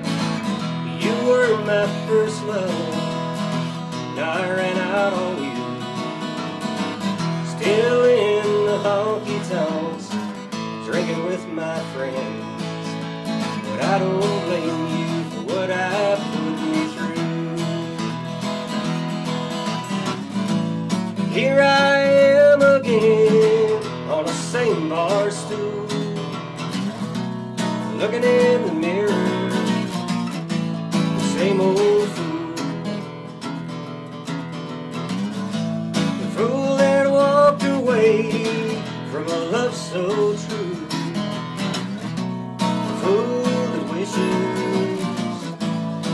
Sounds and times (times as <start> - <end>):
Acoustic guitar: 0.0 - 46.1.